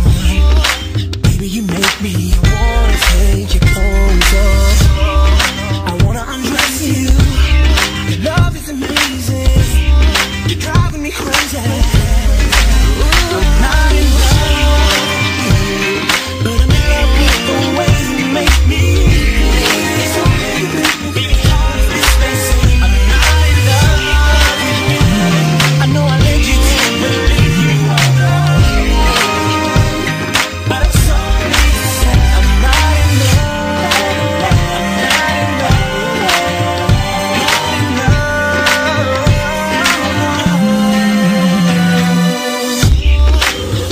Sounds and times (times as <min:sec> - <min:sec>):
Pop music: 0:00.0 - 0:43.9.